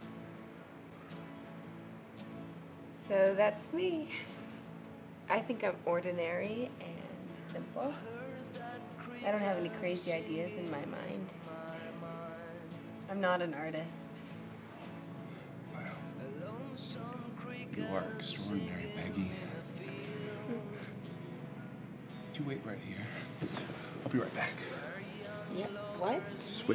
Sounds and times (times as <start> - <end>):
Music: 0.0 - 26.7.